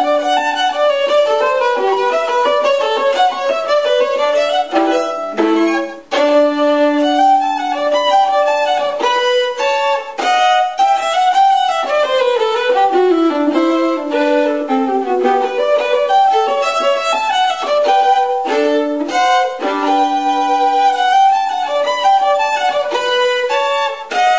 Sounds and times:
Violin, fiddle: 0.0s - 24.3s.

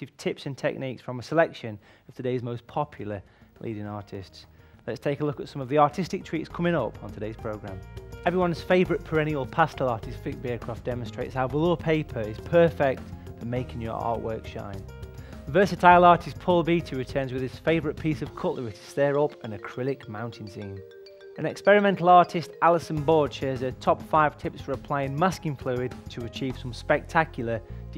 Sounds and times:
Speech: 0.0s - 14.8s, 15.5s - 20.8s, 21.4s - 27.9s
Music: 1.4s - 27.9s.

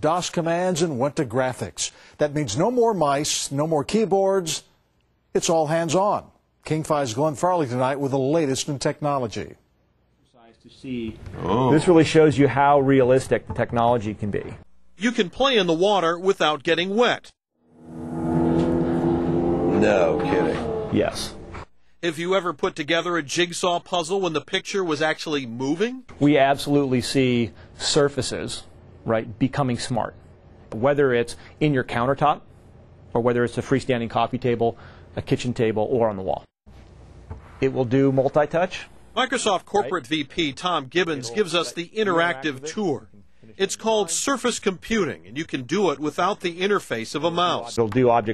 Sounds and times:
Speech: 10.3s - 17.3s, 19.8s - 21.4s, 22.0s - 30.2s, 33.2s - 36.5s, 37.6s - 48.3s.

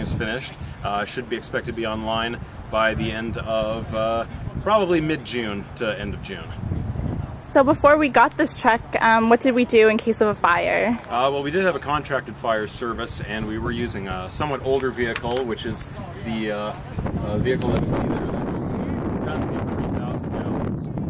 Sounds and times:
Speech: 7.4s - 20.7s.

